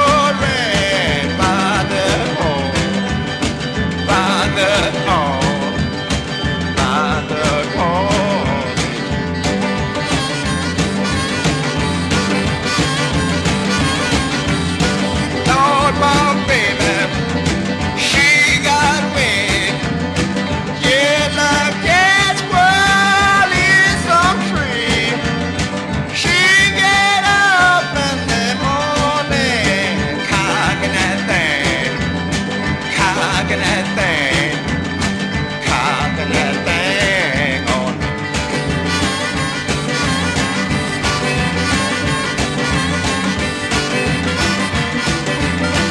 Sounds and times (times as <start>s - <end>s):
Music: 0.0s - 45.9s.